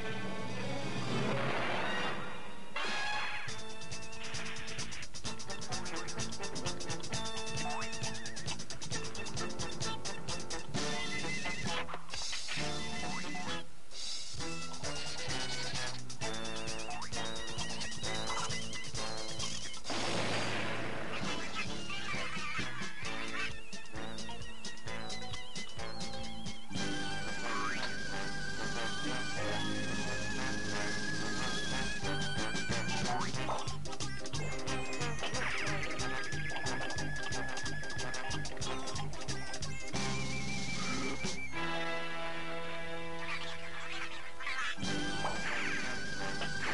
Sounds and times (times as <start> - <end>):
Music: 0.0 - 46.7.